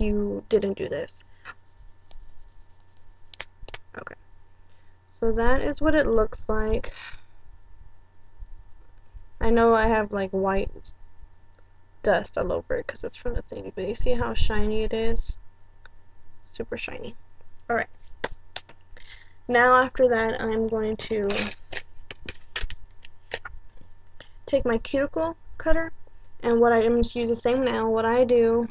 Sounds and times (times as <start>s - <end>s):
Speech: 0.0s - 1.3s, 3.7s - 4.2s, 5.2s - 7.2s, 9.4s - 10.9s, 12.0s - 15.4s, 16.6s - 17.9s, 19.0s - 22.3s, 24.5s - 28.7s
Inside, small room: 0.0s - 28.7s.